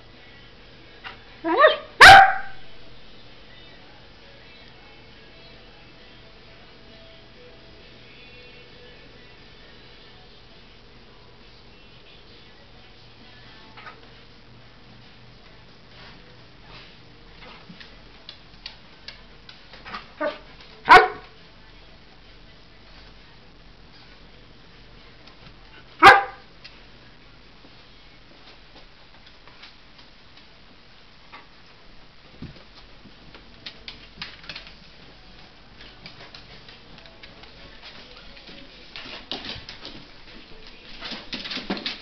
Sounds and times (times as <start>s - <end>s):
Bark: 1.5s - 2.6s, 20.2s - 21.3s, 26.0s - 26.5s.